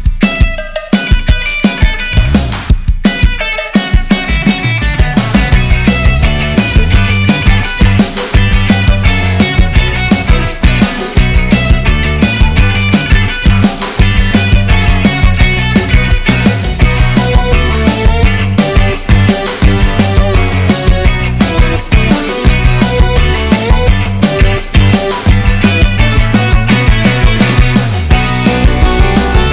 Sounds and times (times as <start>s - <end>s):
Music: 0.0s - 29.5s.